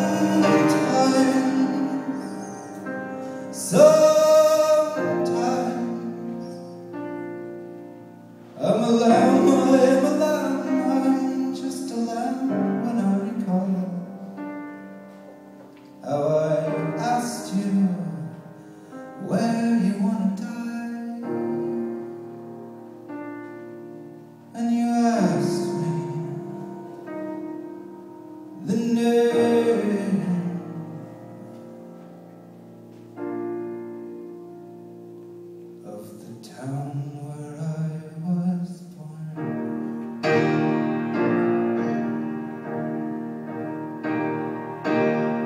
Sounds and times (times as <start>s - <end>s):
Music: 0.0s - 45.4s.